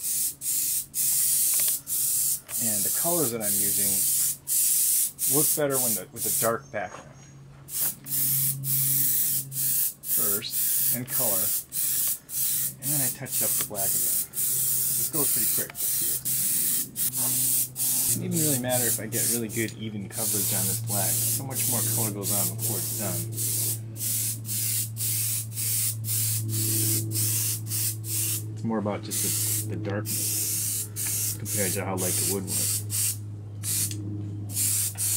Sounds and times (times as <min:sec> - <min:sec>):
Speech: 0:02.6 - 0:04.0, 0:05.3 - 0:07.1, 0:10.2 - 0:11.5, 0:12.8 - 0:14.1, 0:15.1 - 0:16.2, 0:18.1 - 0:23.2, 0:28.6 - 0:30.3, 0:31.4 - 0:32.7.